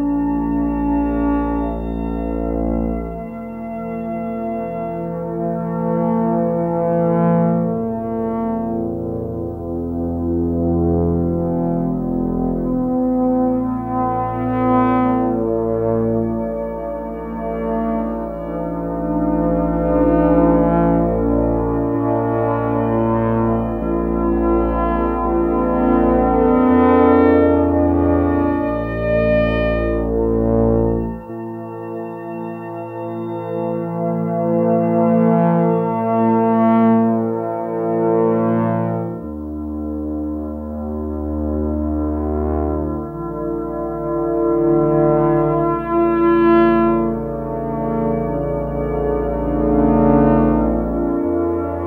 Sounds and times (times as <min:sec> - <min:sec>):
Music: 0:00.0 - 0:51.8.